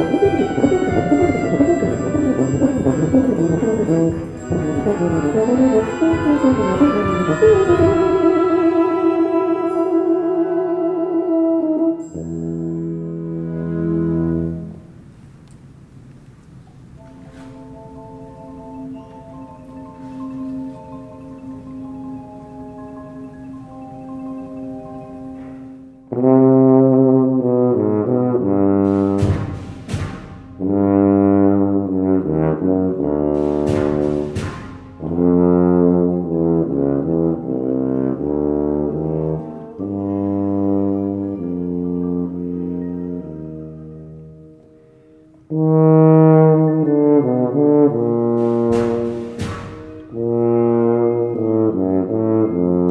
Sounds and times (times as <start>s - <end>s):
Trombone: 0.0s - 15.0s, 25.4s - 44.8s, 45.5s - 52.9s
Orchestra: 0.0s - 52.9s.